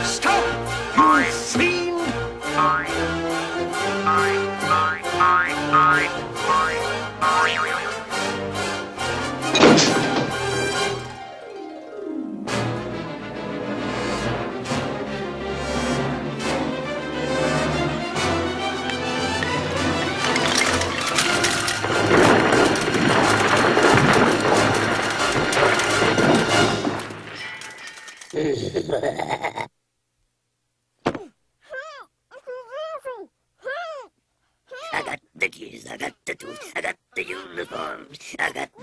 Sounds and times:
Speech: 0:00.0 - 0:02.2, 0:34.8 - 0:38.8.

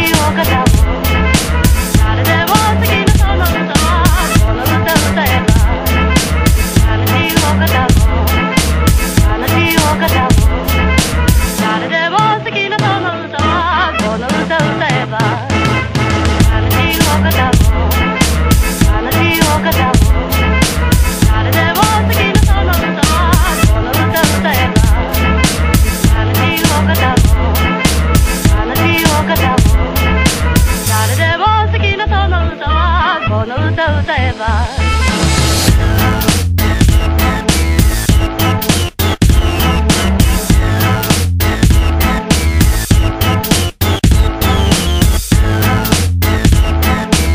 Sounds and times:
House music: 0:00.0 - 0:33.2, 0:34.1 - 0:47.3
Swing music: 0:00.0 - 0:47.3.

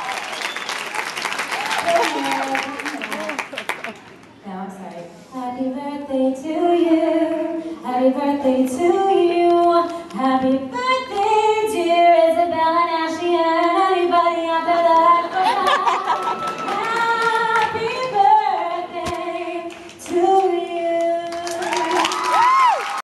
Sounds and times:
Female singing: 0:04.5 - 0:16.1, 0:16.7 - 0:22.5.

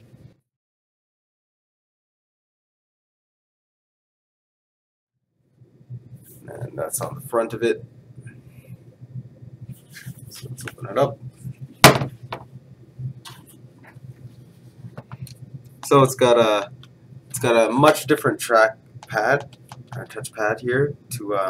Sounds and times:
Speech: 0:06.4 - 0:07.8, 0:10.2 - 0:11.2, 0:15.8 - 0:16.7, 0:17.3 - 0:21.4.

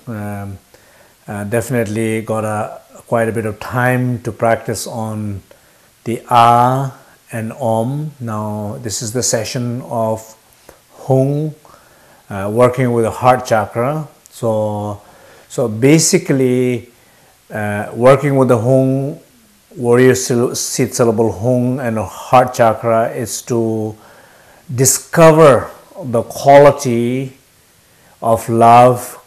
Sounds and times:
Speech: 0:00.0 - 0:00.6, 0:01.3 - 0:05.5, 0:06.1 - 0:10.4, 0:11.0 - 0:11.6, 0:12.3 - 0:16.9, 0:17.5 - 0:24.0, 0:24.7 - 0:27.4, 0:28.2 - 0:29.2.

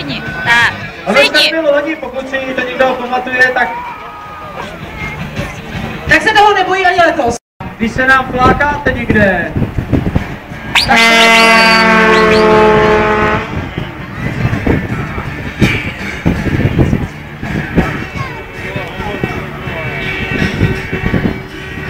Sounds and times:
Truck: 0:08.8 - 0:21.8.

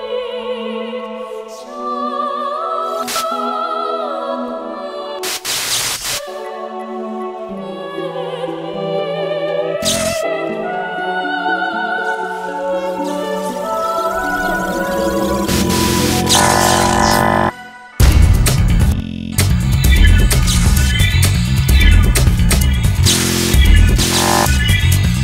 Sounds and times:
Music: 0:00.0 - 0:25.2.

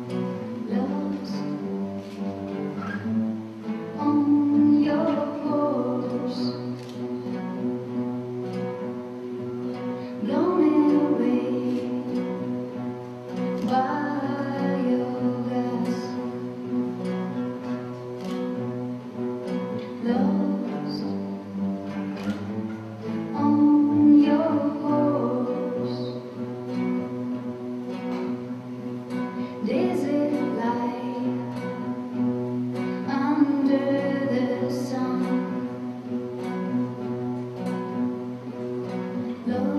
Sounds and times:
Music: 0:00.0 - 0:39.7.

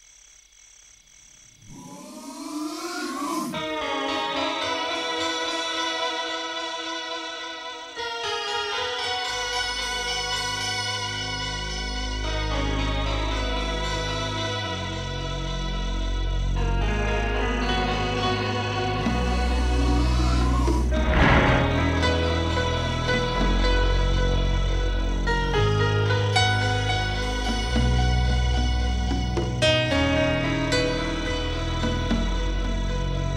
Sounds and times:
Music: 0:03.6 - 0:33.3.

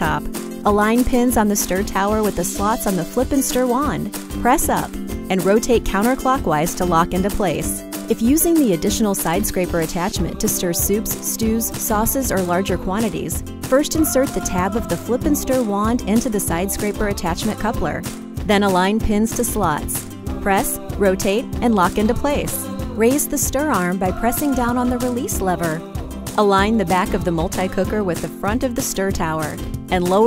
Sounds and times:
Music: 0:00.0 - 0:30.2
Speech: 0:00.0 - 0:30.2.

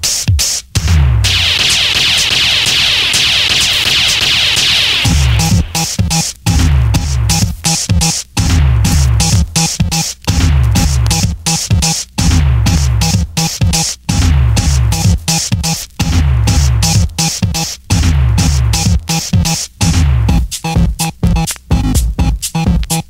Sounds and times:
House music: 0:00.0 - 0:23.0
Techno: 0:00.0 - 0:23.0.

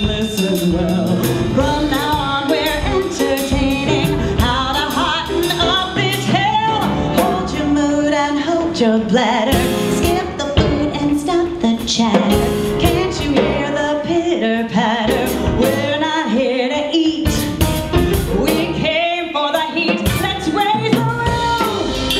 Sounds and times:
Female singing: 0:00.0 - 0:17.6, 0:18.2 - 0:22.2
Music: 0:00.0 - 0:22.2.

